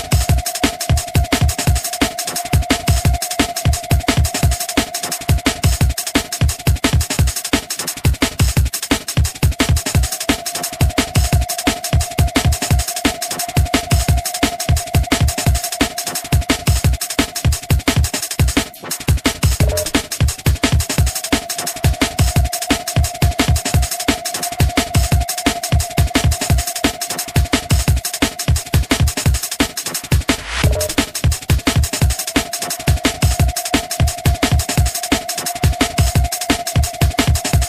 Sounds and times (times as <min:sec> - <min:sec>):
Background music: 0:00.0 - 0:37.6.